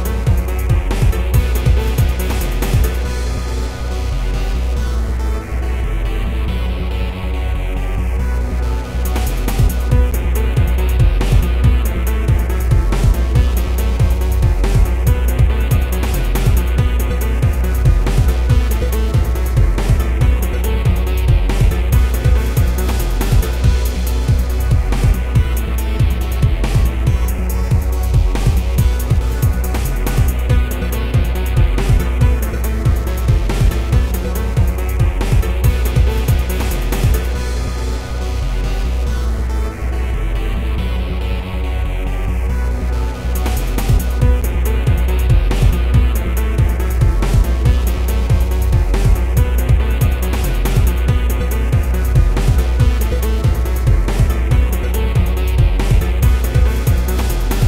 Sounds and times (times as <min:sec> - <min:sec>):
Soundtrack music: 0:00.0 - 0:57.6
Video game music: 0:00.0 - 0:57.6.